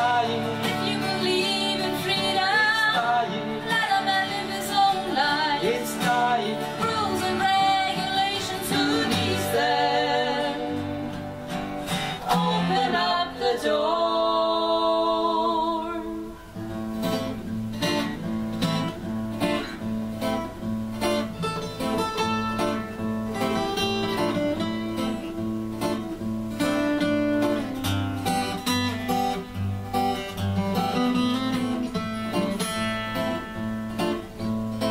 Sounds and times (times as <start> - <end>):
Acoustic guitar: 0.0 - 34.9.